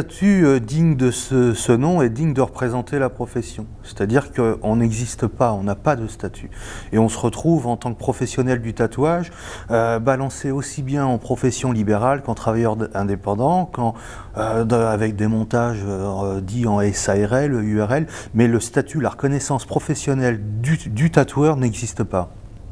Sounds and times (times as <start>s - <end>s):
Speech: 0.0s - 22.4s.